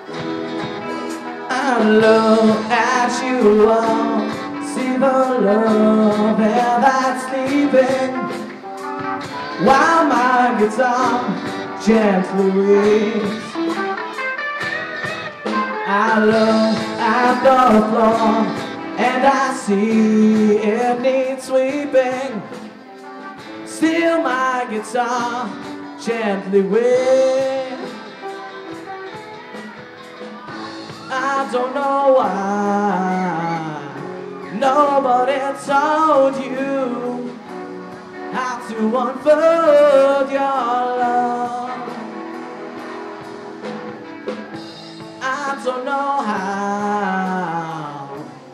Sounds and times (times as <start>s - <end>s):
Acoustic guitar: 0.0s - 48.5s.